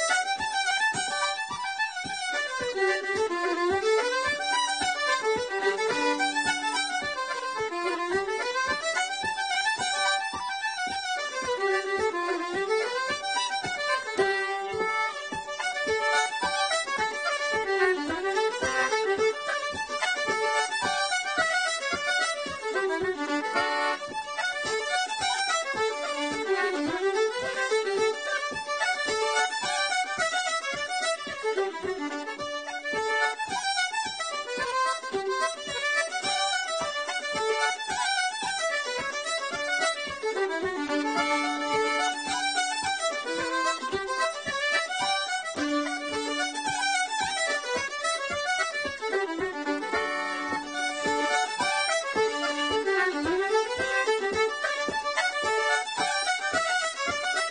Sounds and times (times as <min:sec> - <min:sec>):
Music: 0:00.0 - 0:57.5.